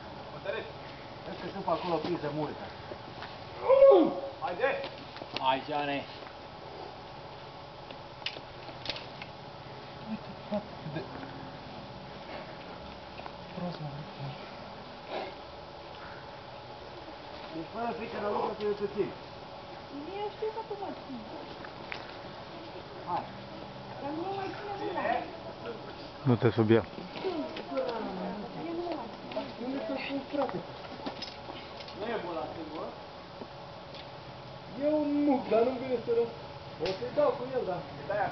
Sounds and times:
Outside, rural or natural: 0.0 - 38.3.

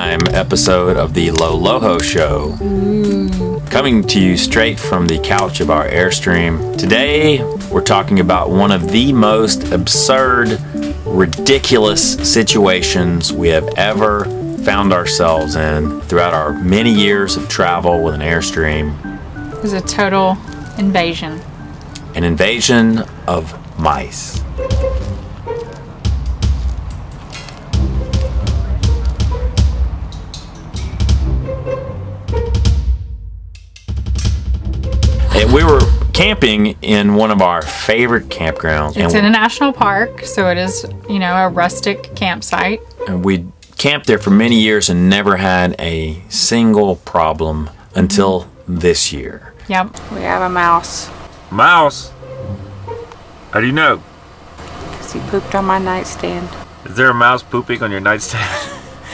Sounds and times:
Speech: 0.0 - 19.0, 35.2 - 52.1, 55.1 - 58.4
Music: 0.0 - 59.1.

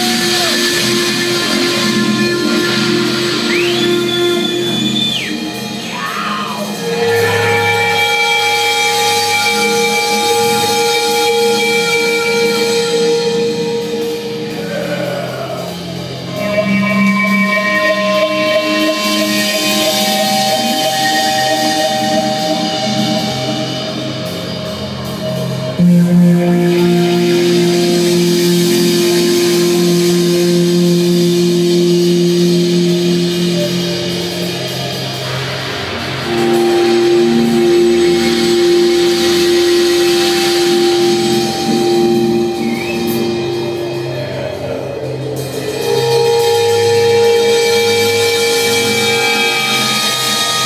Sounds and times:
Guitar: 0.0 - 50.6.

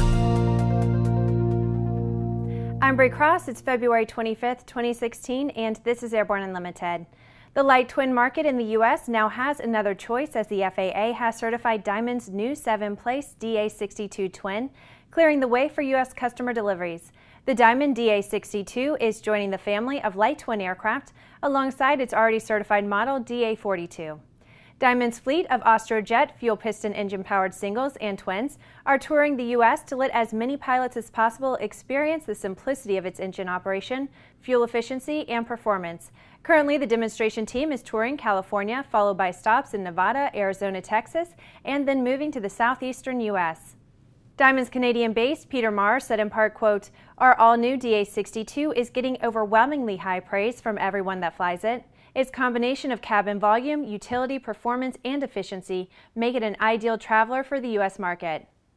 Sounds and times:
Speech: 2.8 - 24.2, 24.8 - 43.8, 44.4 - 58.5.

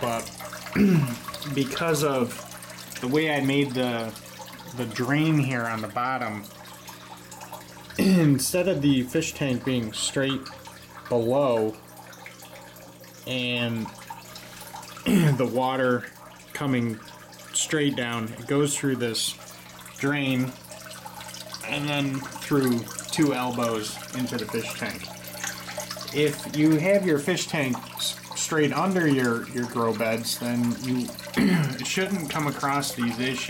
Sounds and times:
Speech: 0.0 - 0.3, 1.5 - 2.4, 3.0 - 4.2, 4.8 - 6.5, 8.1 - 10.5, 11.1 - 11.8, 13.3 - 14.0, 15.3 - 17.0, 17.6 - 19.4, 20.0 - 20.6, 21.6 - 25.1, 26.1 - 33.5.

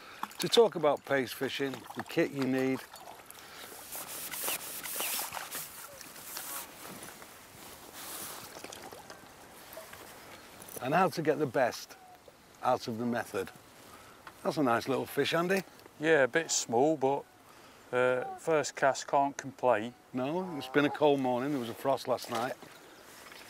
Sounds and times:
Speech: 10.8 - 12.0, 14.4 - 17.2, 18.0 - 22.6.

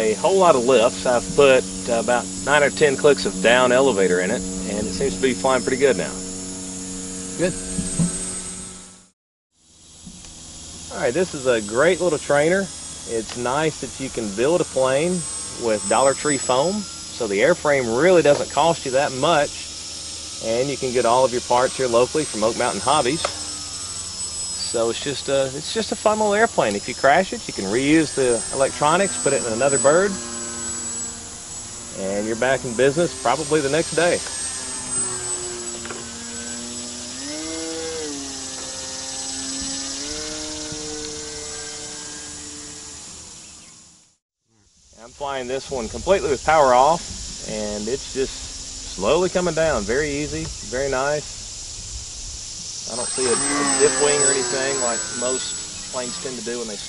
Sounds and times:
Speech: 0.0 - 6.2, 7.4 - 7.6, 10.9 - 19.7, 20.4 - 23.3, 24.6 - 30.2, 32.0 - 34.2, 45.0 - 51.3, 52.9 - 56.8.

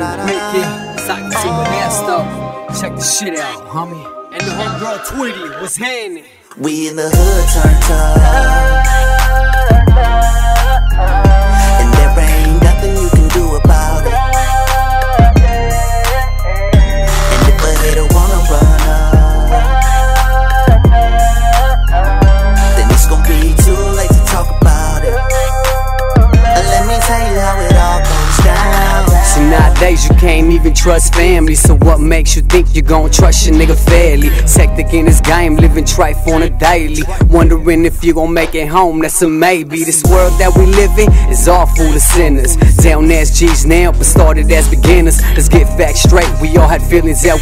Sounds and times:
Music: 0.0 - 47.4.

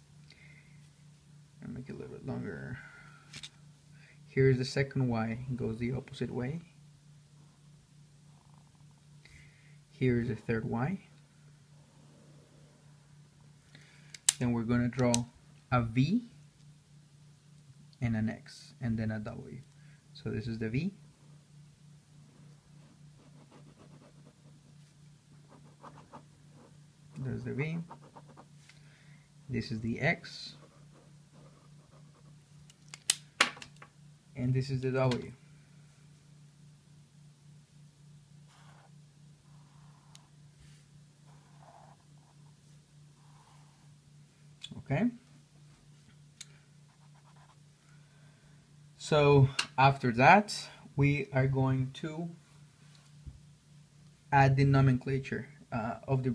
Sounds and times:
Speech: 1.6 - 2.8, 4.3 - 6.8, 10.0 - 11.1, 14.4 - 16.4, 18.0 - 21.0, 27.2 - 27.9, 29.5 - 30.7, 34.4 - 35.4, 44.7 - 45.3, 49.0 - 52.4, 54.3 - 56.3.

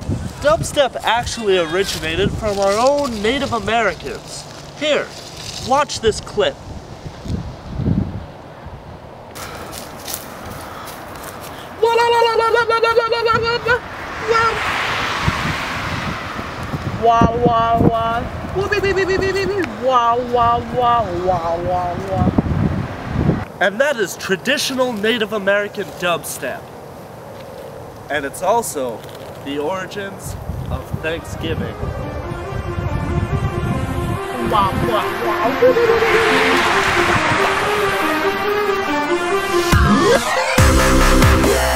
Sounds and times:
Speech: 0.4 - 6.6, 17.0 - 22.4, 23.6 - 26.6, 28.1 - 31.8.

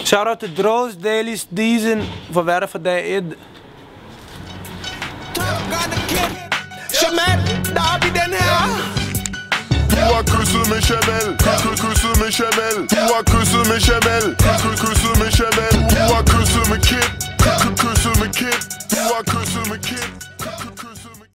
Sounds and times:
Music: 4.3 - 21.3.

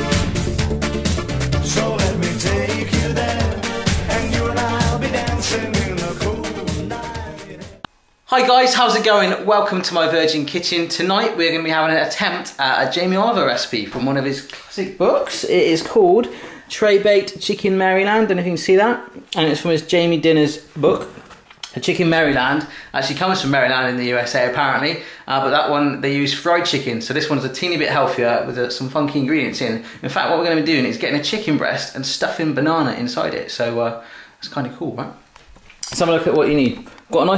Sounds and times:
Speech: 8.3 - 35.2, 35.9 - 37.3.

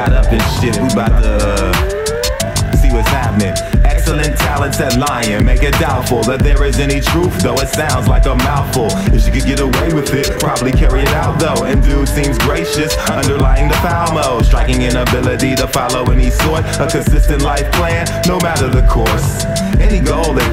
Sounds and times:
Music: 0.0 - 20.5.

